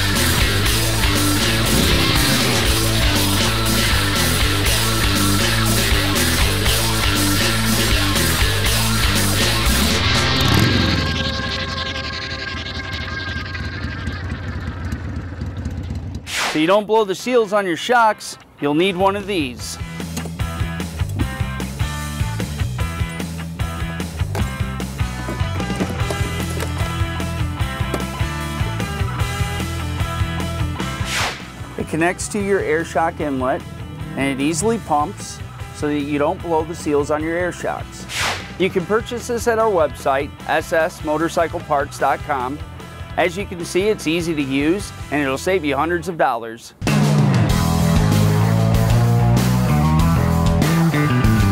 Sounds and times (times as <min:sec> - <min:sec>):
Music: 0:00.0 - 0:11.5, 0:16.6 - 0:51.5
Speech: 0:16.6 - 0:19.8, 0:31.8 - 0:33.6, 0:34.2 - 0:38.0, 0:38.6 - 0:42.6, 0:43.2 - 0:46.8.